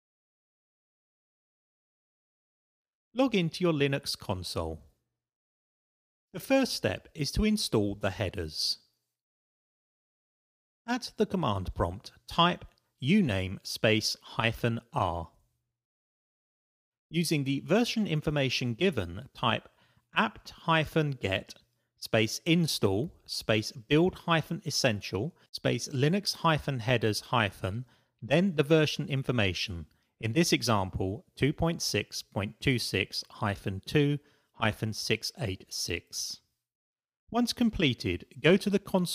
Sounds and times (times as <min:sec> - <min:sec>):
Speech: 0:03.2 - 0:05.0, 0:06.4 - 0:08.9, 0:10.9 - 0:15.4, 0:17.1 - 0:36.5, 0:37.3 - 0:39.1.